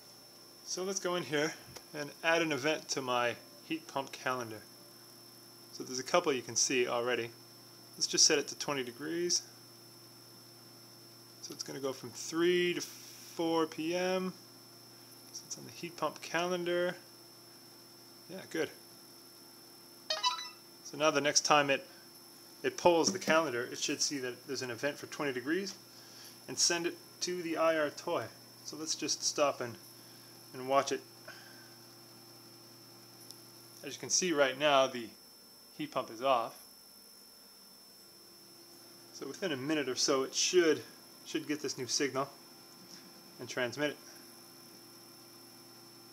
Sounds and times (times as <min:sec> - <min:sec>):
Speech: 0:00.7 - 0:04.7, 0:05.8 - 0:07.4, 0:08.0 - 0:09.5, 0:11.4 - 0:14.4, 0:15.4 - 0:17.0, 0:18.3 - 0:18.8, 0:20.9 - 0:21.9, 0:22.6 - 0:25.8, 0:26.5 - 0:29.8, 0:30.5 - 0:31.0, 0:33.8 - 0:35.2, 0:35.8 - 0:36.6, 0:39.2 - 0:42.4, 0:43.4 - 0:44.0.